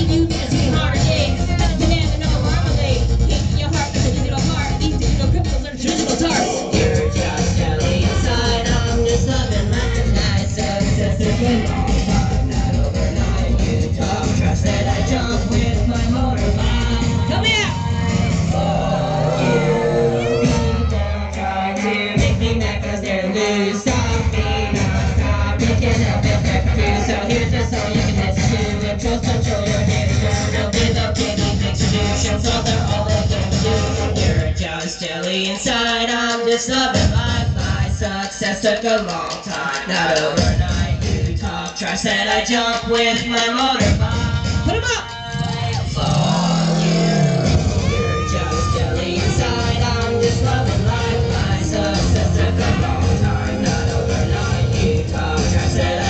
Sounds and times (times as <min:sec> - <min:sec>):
Crowd: 0:00.0 - 0:56.1
Inside, large room or hall: 0:00.0 - 0:56.1
Music: 0:00.0 - 0:56.1
Singing: 0:00.0 - 0:56.1.